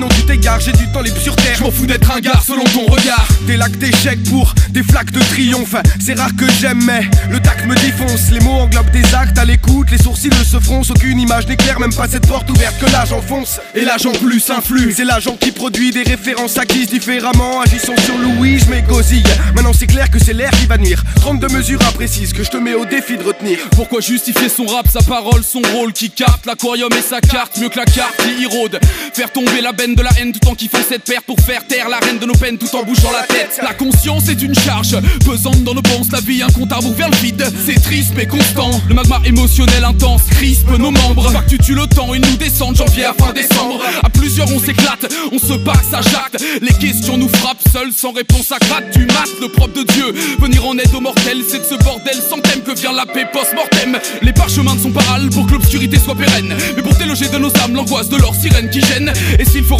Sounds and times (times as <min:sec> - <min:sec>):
Hip hop music: 0:00.0 - 0:59.7
Rapping: 0:00.0 - 0:59.7.